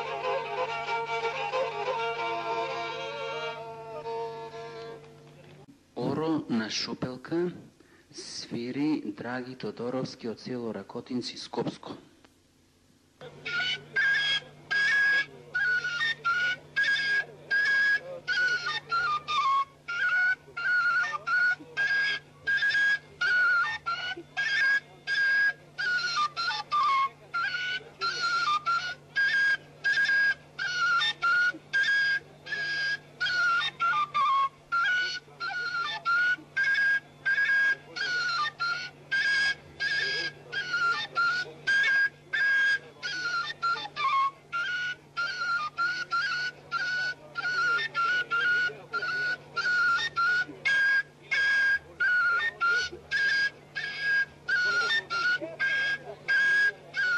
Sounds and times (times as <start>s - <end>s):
Music: 0.0s - 5.4s, 13.2s - 57.1s
Speech: 5.2s - 12.1s, 39.7s - 44.0s, 46.6s - 53.7s.